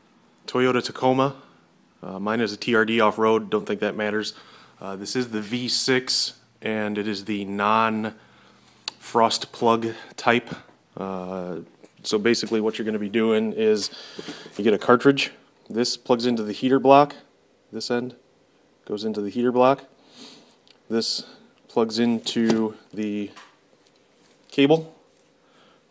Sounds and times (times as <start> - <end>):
Speech: 0.5 - 8.2, 8.9 - 14.0, 14.6 - 18.2, 18.9 - 19.9, 20.9 - 23.4, 24.5 - 25.0.